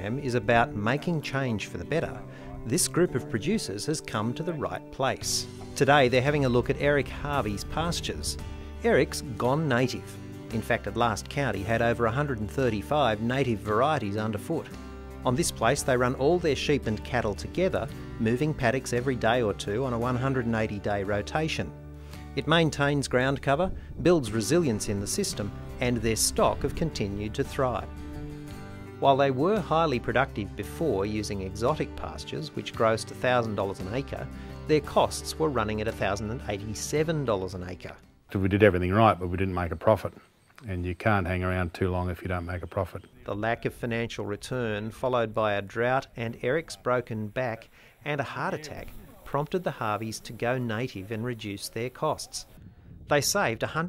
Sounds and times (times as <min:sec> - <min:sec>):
Speech: 0:00.0 - 0:21.7, 0:22.4 - 0:27.9, 0:29.0 - 0:53.8
Music: 0:00.0 - 0:53.8.